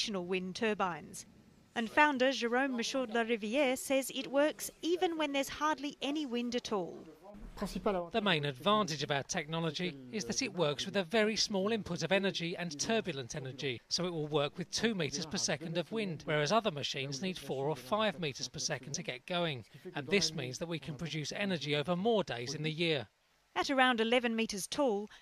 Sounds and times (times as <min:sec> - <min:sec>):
Speech: 0:00.0 - 0:01.2, 0:01.8 - 0:25.1.